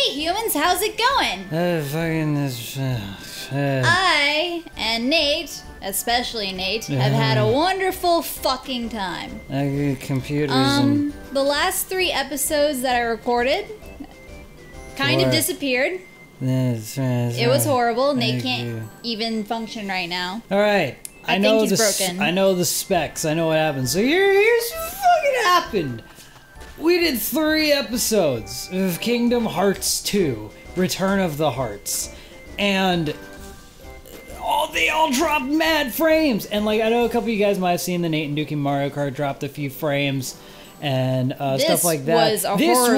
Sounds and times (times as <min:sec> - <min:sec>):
Music: 0:00.0 - 0:42.9.